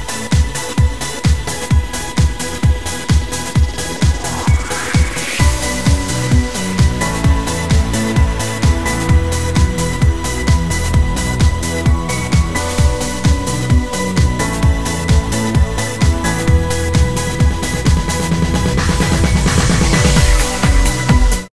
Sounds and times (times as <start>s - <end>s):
Music: 0.0s - 21.5s.